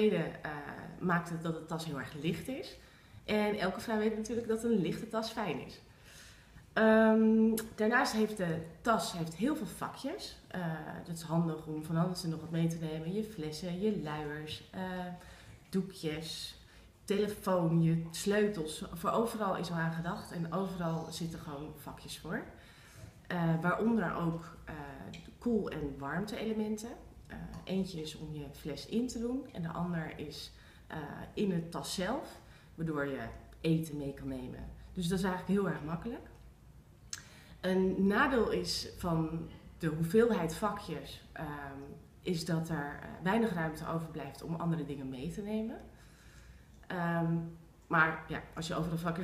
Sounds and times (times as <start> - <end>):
Speech: 0.0 - 5.9, 6.8 - 22.6, 23.3 - 36.4, 37.6 - 45.9, 46.8 - 49.2.